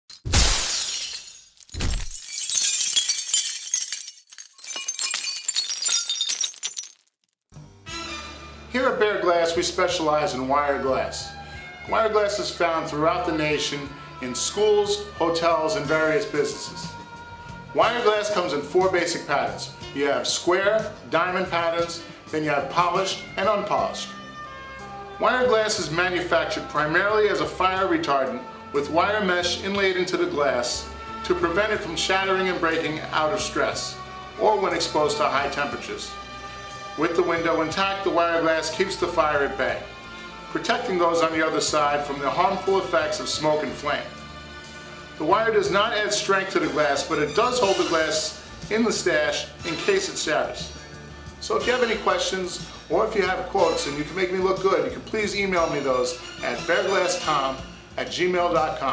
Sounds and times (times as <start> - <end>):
Glass: 0.1 - 7.3
Music: 7.5 - 58.9
Speech: 8.7 - 11.3, 11.9 - 16.9, 17.8 - 24.1, 25.2 - 36.1, 37.0 - 39.8, 40.6 - 44.1, 45.2 - 50.7, 51.4 - 58.9.